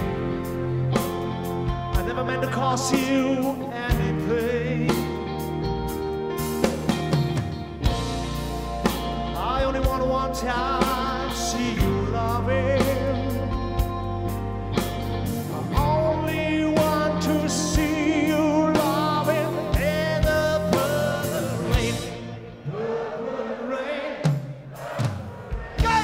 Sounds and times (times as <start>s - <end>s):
Music: 0.0s - 26.0s.